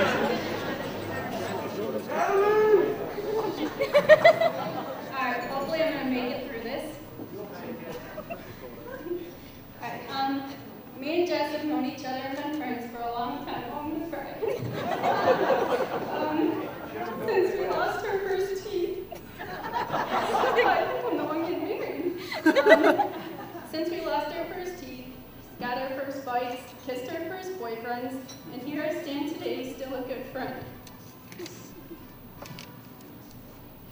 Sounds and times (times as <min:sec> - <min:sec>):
Female speech, woman speaking: 0:05.1 - 0:07.1, 0:09.8 - 0:14.6, 0:16.0 - 0:19.1, 0:20.3 - 0:22.2, 0:23.7 - 0:30.8.